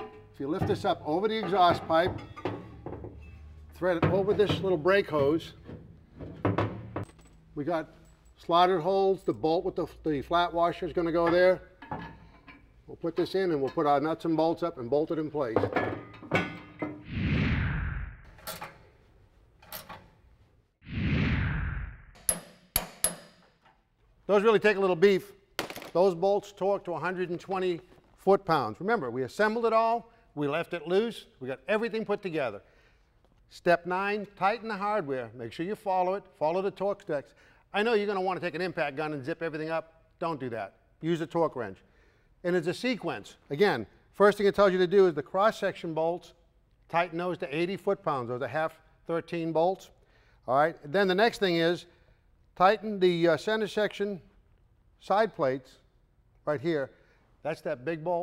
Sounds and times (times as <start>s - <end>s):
Speech: 0.4s - 2.2s, 3.8s - 5.6s, 7.6s - 11.7s, 12.9s - 15.6s, 24.3s - 25.4s, 26.0s - 32.6s, 33.5s - 41.8s, 42.4s - 49.9s, 50.5s - 51.9s, 52.6s - 54.3s, 55.0s - 55.8s, 56.4s - 58.2s.